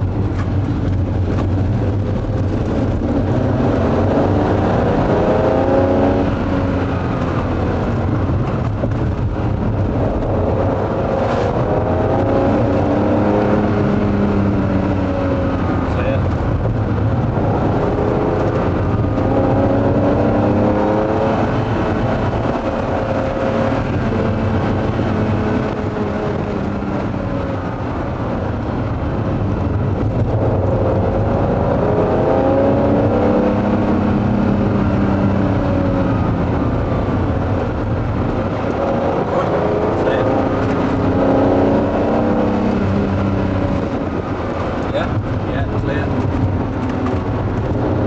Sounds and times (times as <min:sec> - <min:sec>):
Car: 0:00.0 - 0:48.0.